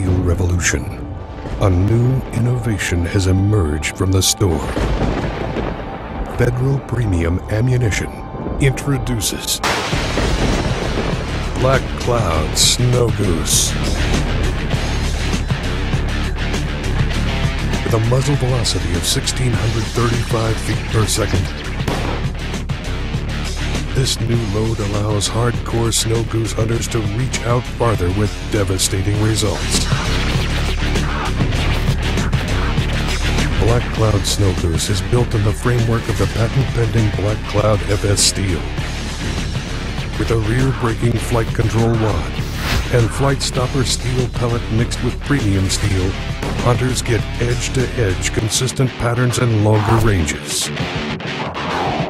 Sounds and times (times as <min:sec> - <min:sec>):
Speech: 0:00.0 - 0:04.8, 0:06.3 - 0:09.6, 0:11.6 - 0:13.8, 0:17.8 - 0:21.6, 0:23.9 - 0:30.0, 0:33.5 - 0:38.8, 0:40.2 - 0:50.8
Music: 0:00.0 - 0:52.1.